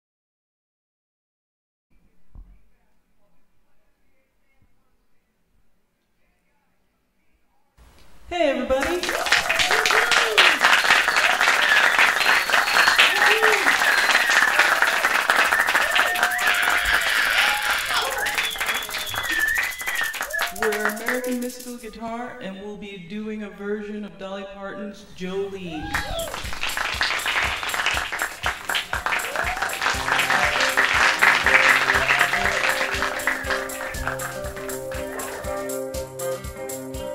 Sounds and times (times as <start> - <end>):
Guitar: 27.7 - 37.1.